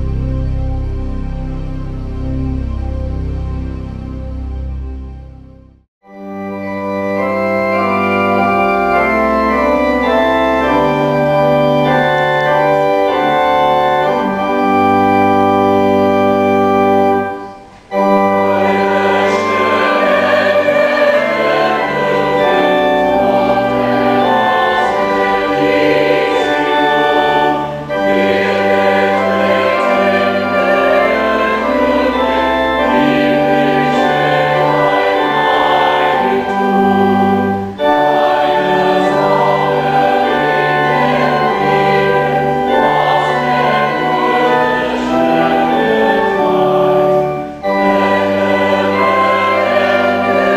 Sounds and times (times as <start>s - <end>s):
Music: 0.0s - 50.5s.